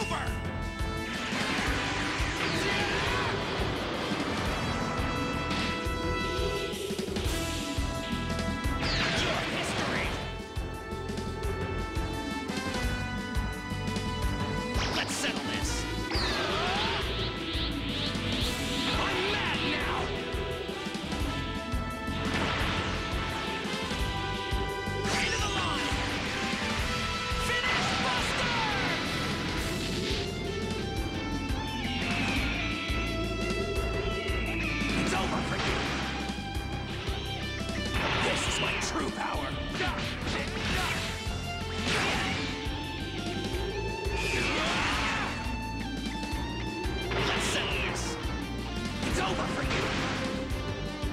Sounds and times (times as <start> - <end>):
Speech: 0.0 - 0.4, 15.0 - 17.0, 25.1 - 26.0, 35.0 - 35.8, 38.2 - 41.0, 47.3 - 48.2, 49.1 - 49.8
Music: 0.0 - 51.1.